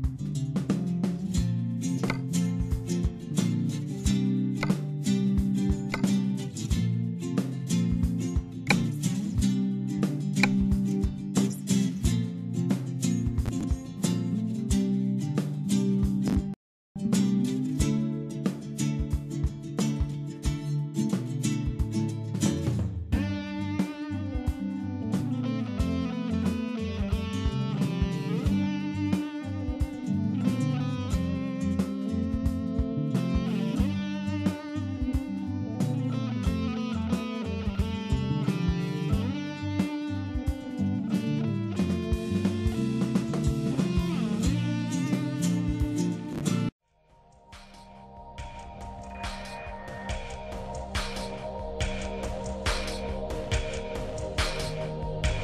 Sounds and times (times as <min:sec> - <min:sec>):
Music: 0:00.0 - 0:55.4.